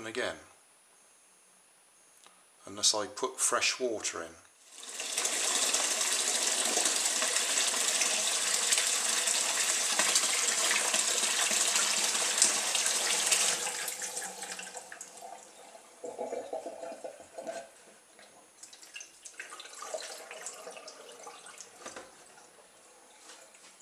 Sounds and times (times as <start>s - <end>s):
Water tap, faucet: 4.7s - 17.0s, 18.6s - 22.6s
Sink (filling or washing): 4.7s - 17.6s, 18.6s - 22.6s
Bathtub (filling or washing): 4.7s - 23.6s
Water: 12.4s - 23.6s.